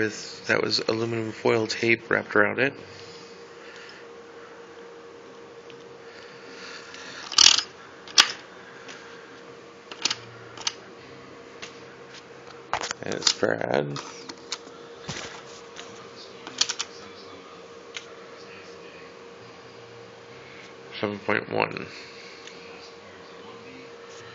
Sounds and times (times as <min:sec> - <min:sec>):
Speech: 0:00.0 - 0:02.8, 0:13.0 - 0:14.2, 0:15.8 - 0:19.9, 0:20.9 - 0:22.0, 0:22.6 - 0:24.3.